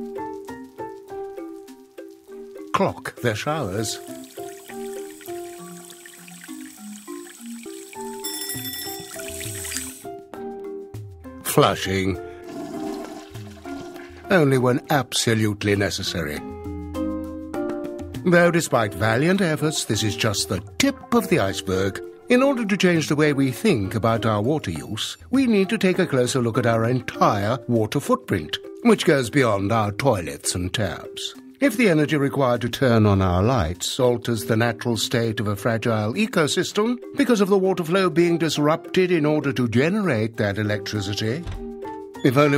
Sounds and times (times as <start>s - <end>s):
Music: 0.0s - 42.5s
Speech: 2.7s - 4.0s, 11.4s - 12.2s, 14.3s - 16.5s, 18.2s - 41.5s, 42.2s - 42.5s.